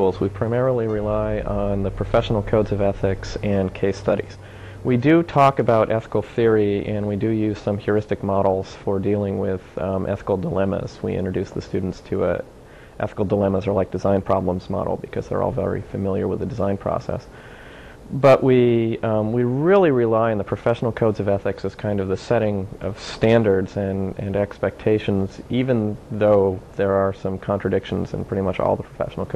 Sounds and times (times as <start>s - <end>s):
Speech: 0.0s - 17.3s, 18.0s - 29.3s.